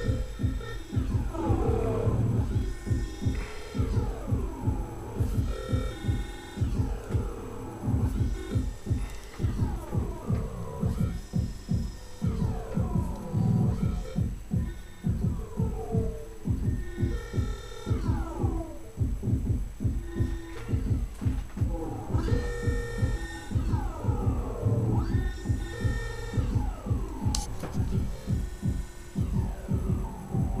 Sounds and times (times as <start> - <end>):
Hum: 0.0 - 30.6
Throbbing: 0.0 - 30.6.